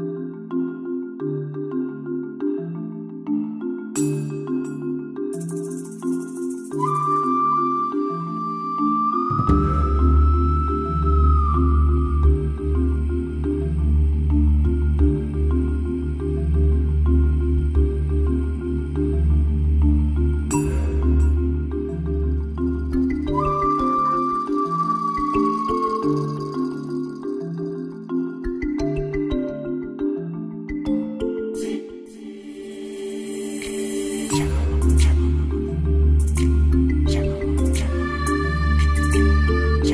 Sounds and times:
Music: 0.0 - 39.9.

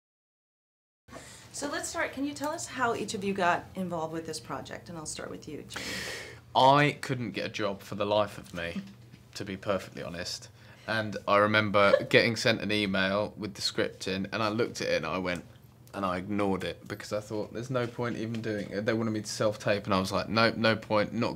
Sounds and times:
Speech: 6.6 - 8.8, 9.4 - 21.3.

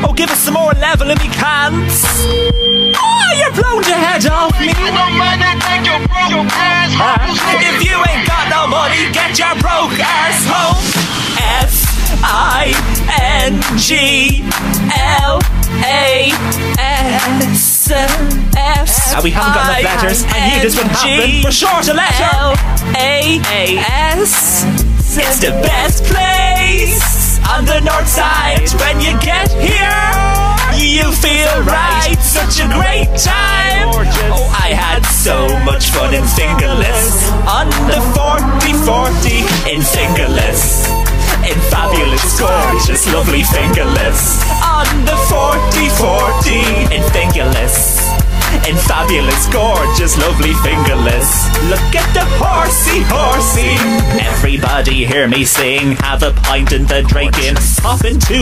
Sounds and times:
Music: 0.0 - 58.4.

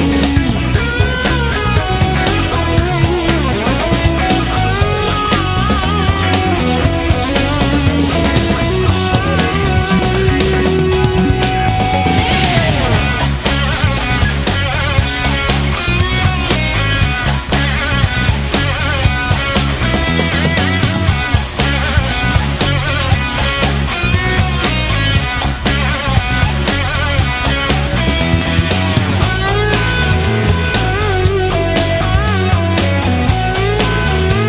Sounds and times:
Video game music: 0.0 - 34.4.

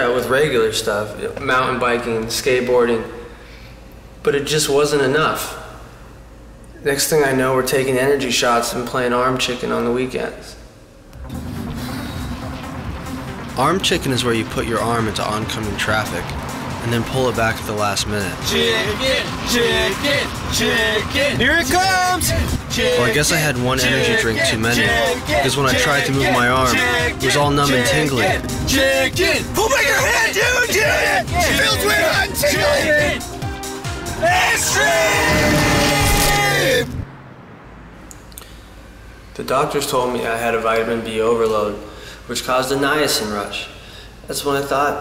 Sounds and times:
Speech: 0.0 - 3.2, 4.2 - 5.7, 6.8 - 10.6, 13.6 - 20.8, 21.4 - 28.4, 39.4 - 45.0
Music: 11.2 - 36.9.

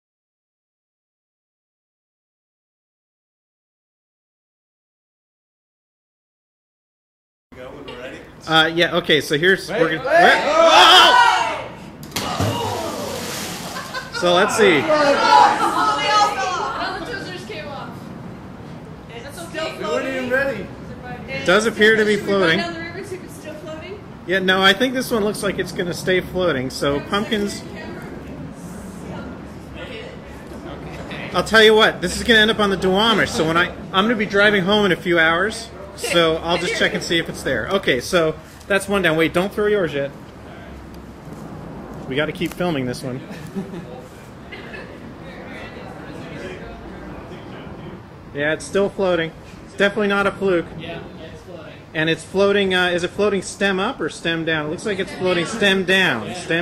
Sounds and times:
Outside, rural or natural: 9.8 - 17.0.

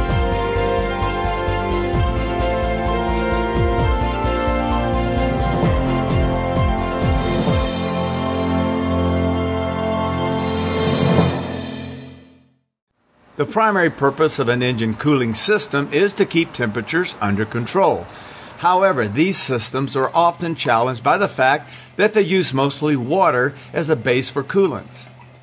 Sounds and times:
Music: 0.0 - 12.6.

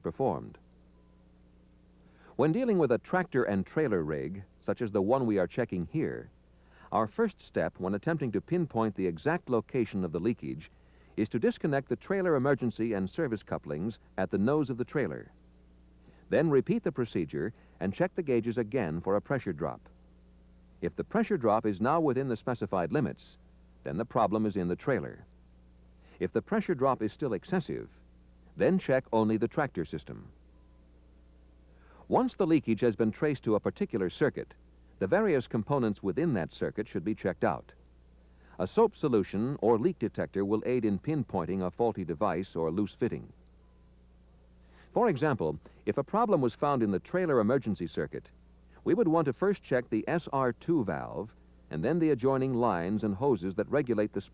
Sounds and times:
Speech: 0.0 - 0.6, 2.4 - 6.3, 6.9 - 15.4, 16.3 - 19.9, 20.8 - 25.3, 26.2 - 28.0, 28.6 - 30.3, 32.0 - 37.8, 38.6 - 43.4, 44.9 - 54.3.

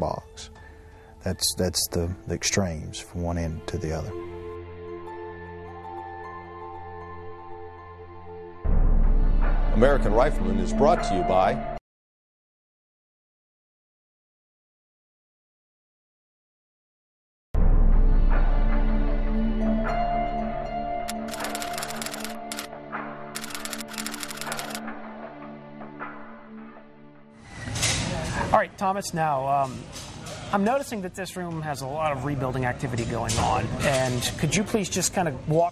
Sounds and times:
Music: 0.0 - 11.8, 17.6 - 28.6
Speech: 1.2 - 4.2, 9.8 - 11.6, 30.5 - 35.7.

